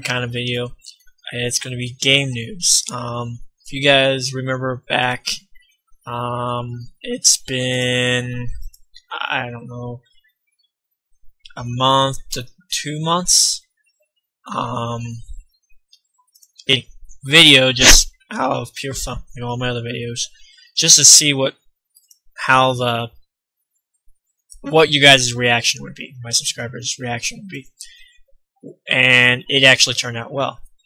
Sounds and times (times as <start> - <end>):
Speech: 0.0 - 5.5, 6.1 - 10.0, 11.5 - 13.6, 14.5 - 15.4, 16.5 - 21.6, 22.4 - 23.2, 24.6 - 28.0, 28.7 - 30.7.